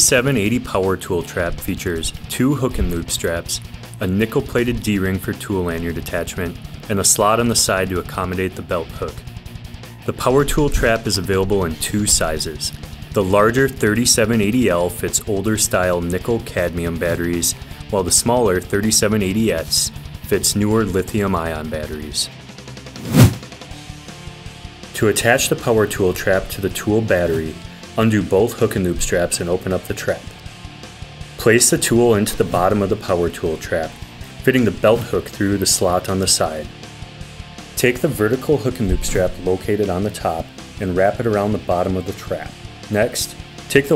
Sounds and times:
Speech: 0.0s - 9.2s, 10.0s - 22.3s, 25.0s - 30.4s, 31.4s - 36.7s, 37.8s - 43.9s
Music: 0.0s - 43.9s.

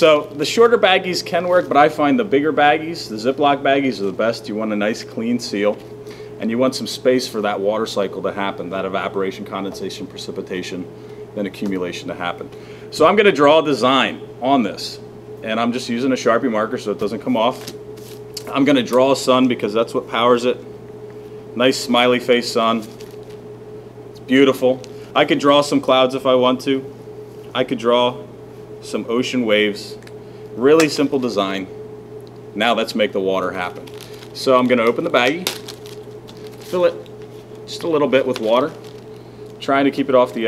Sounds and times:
Speech: 0.0s - 5.8s, 6.4s - 17.7s, 18.4s - 20.6s, 21.6s - 22.9s, 24.3s - 26.9s, 27.5s - 30.0s, 30.6s - 31.7s, 32.6s - 35.5s, 36.7s - 37.0s, 37.7s - 38.8s, 39.6s - 40.4s.

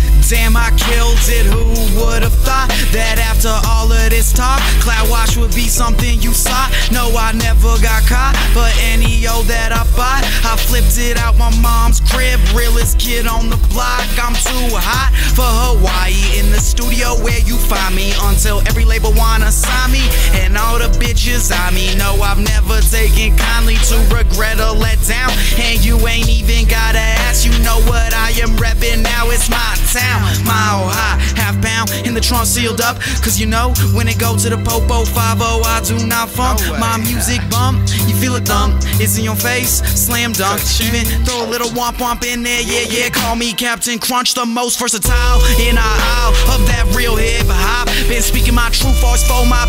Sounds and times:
Rhythm and blues: 0.0s - 49.6s.

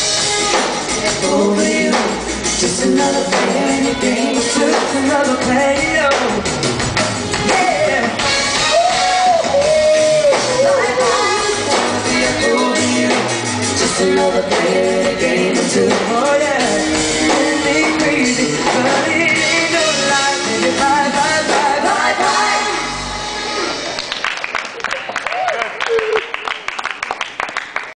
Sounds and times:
Music: 0.0s - 24.4s
Male singing: 1.0s - 6.4s, 7.4s - 22.5s.

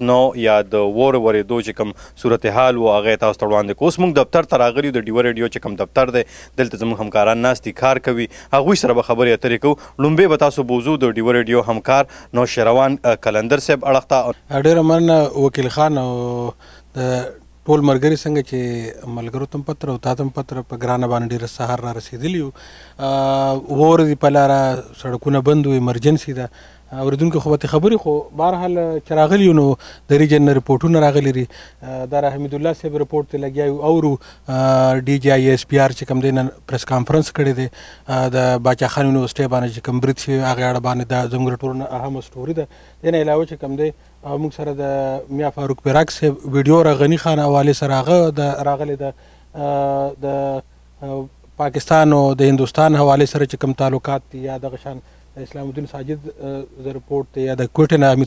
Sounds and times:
Speech: 0.0s - 58.2s.

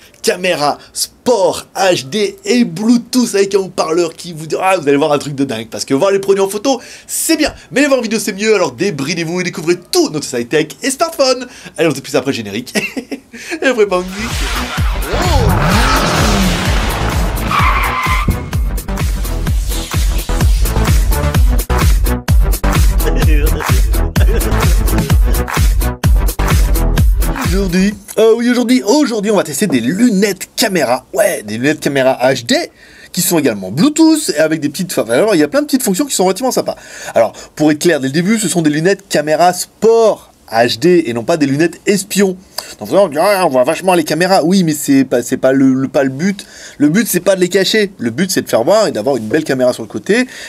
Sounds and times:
Speech: 0.2s - 12.8s, 13.6s - 14.3s, 15.1s - 15.7s, 23.0s - 23.8s, 27.4s - 50.3s
Music: 14.0s - 27.9s.

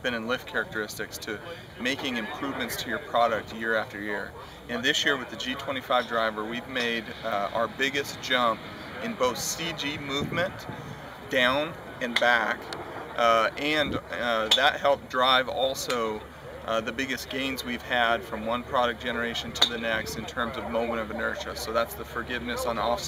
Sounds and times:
Speech: 0.0s - 23.0s.

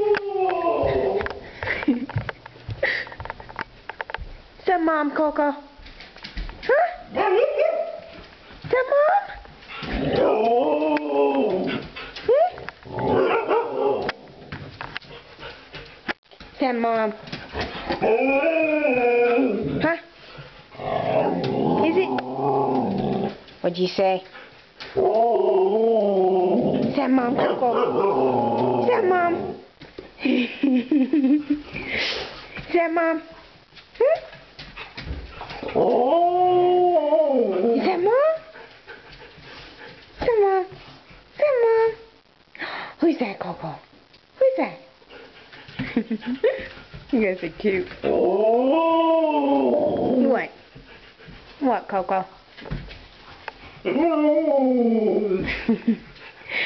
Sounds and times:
Howl: 0.0s - 1.3s, 10.1s - 11.8s, 18.0s - 19.8s, 35.6s - 38.0s, 48.0s - 50.4s, 53.9s - 55.5s
Speech: 4.6s - 5.8s, 8.7s - 9.4s, 16.6s - 17.2s, 23.6s - 24.3s, 26.9s - 27.9s, 28.8s - 29.6s, 32.7s - 33.4s, 34.0s - 34.4s, 37.5s - 38.5s, 40.2s - 40.8s, 41.4s - 42.1s, 43.0s - 44.9s, 47.1s - 48.0s, 50.2s - 50.6s, 51.6s - 52.4s.

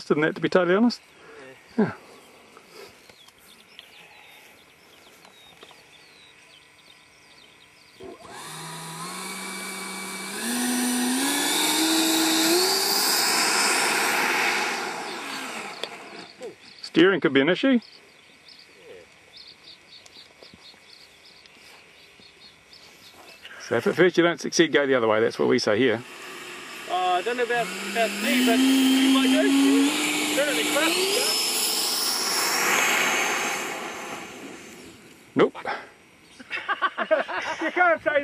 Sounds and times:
Speech: 0.0s - 1.6s, 16.4s - 17.8s, 23.6s - 26.0s, 26.9s - 31.3s, 37.6s - 38.2s
Outside, rural or natural: 0.0s - 38.2s.

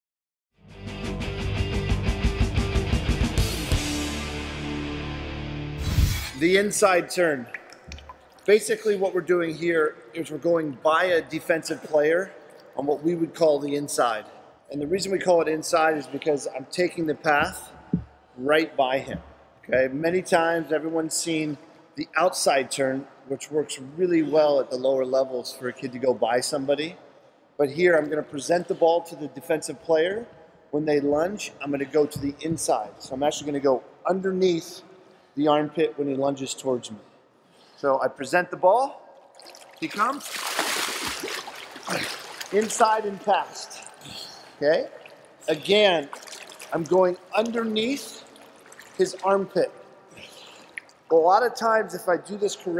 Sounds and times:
Speech: 6.4s - 7.5s, 8.5s - 17.7s, 18.4s - 27.0s, 27.6s - 34.8s, 35.4s - 37.0s, 37.8s - 39.0s, 39.8s - 40.3s, 41.9s - 43.9s, 44.6s - 44.9s, 45.5s - 48.3s, 49.0s - 49.7s, 51.1s - 52.7s.

